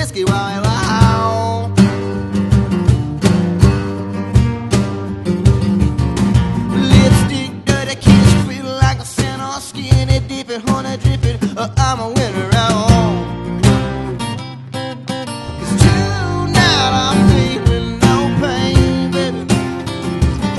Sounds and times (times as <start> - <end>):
Music: 0.0 - 20.5.